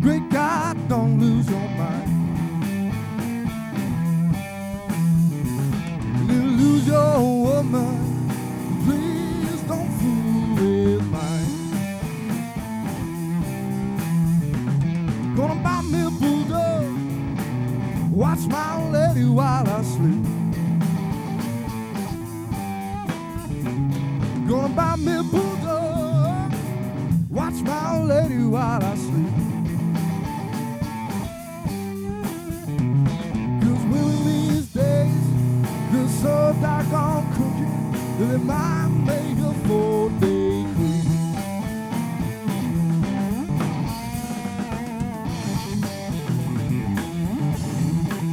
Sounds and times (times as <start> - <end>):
Music: 0.0 - 48.3.